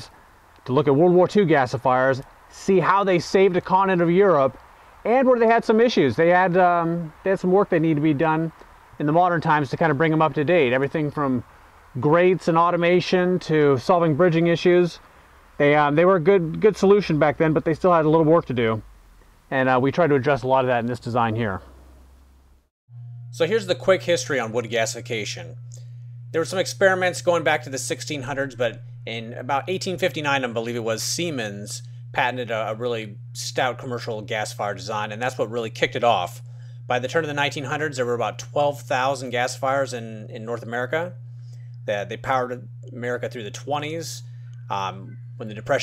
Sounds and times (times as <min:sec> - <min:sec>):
Speech: 0:00.0 - 0:11.4, 0:12.0 - 0:15.0, 0:15.6 - 0:18.8, 0:19.5 - 0:21.7, 0:23.4 - 0:25.6, 0:26.4 - 0:41.2, 0:41.9 - 0:45.8.